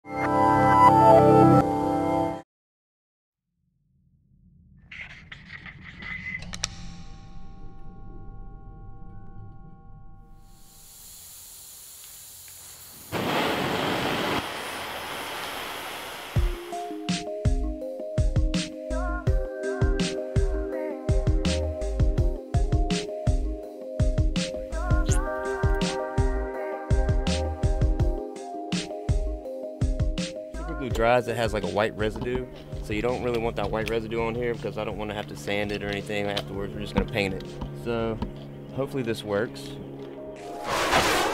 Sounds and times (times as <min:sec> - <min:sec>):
Music: 0:00.0 - 0:02.4, 0:05.6 - 0:10.8, 0:16.4 - 0:41.3.